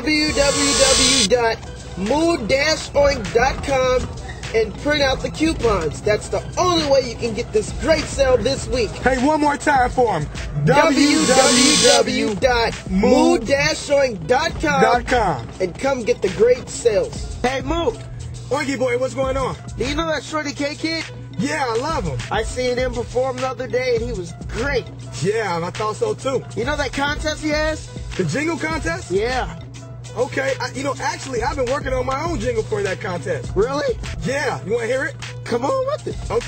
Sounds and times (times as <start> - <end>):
Speech: 0.0 - 29.6, 30.2 - 36.4
Music: 0.0 - 36.4.